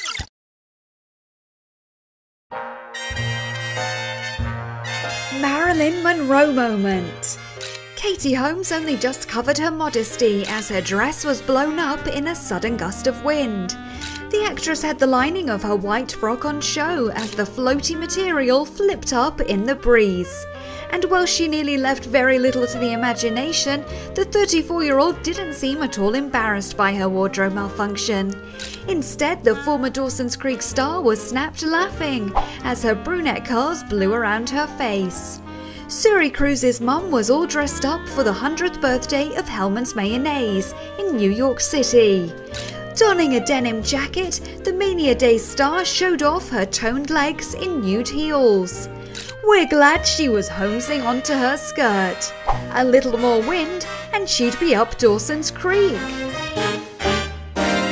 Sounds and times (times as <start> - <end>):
Music: 2.5 - 57.9
Speech: 5.3 - 7.4, 8.0 - 42.4, 43.0 - 56.1.